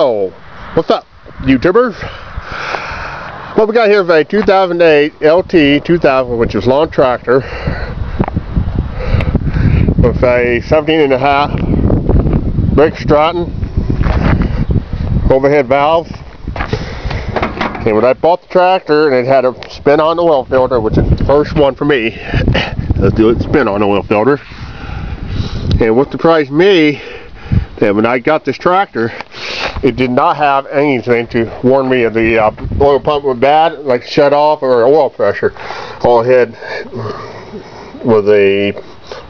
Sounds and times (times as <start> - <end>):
Speech: 0.0 - 2.1, 3.6 - 7.4, 10.0 - 11.6, 12.8 - 13.5, 15.3 - 16.2, 17.8 - 22.2, 23.0 - 24.4, 25.8 - 27.0, 27.8 - 29.1, 29.8 - 36.6, 38.0 - 38.8.